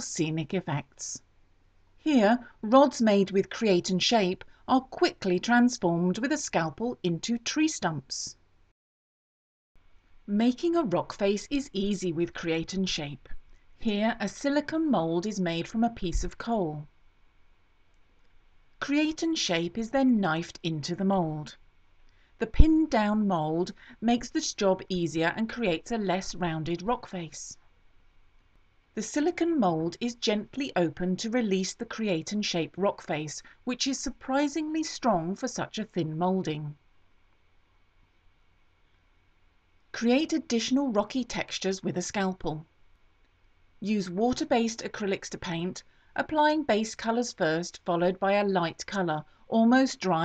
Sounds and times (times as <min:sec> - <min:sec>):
Narration, monologue: 0:00.0 - 0:08.8, 0:09.8 - 0:50.2.